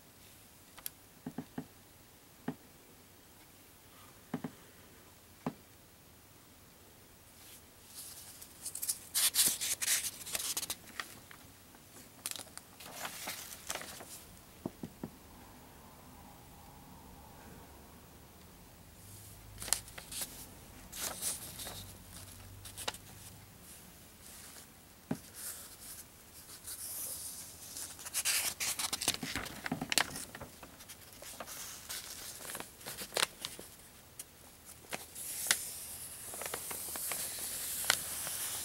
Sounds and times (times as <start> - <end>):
Inside, small room: 0.0 - 38.6
Silence: 13.7 - 22.4.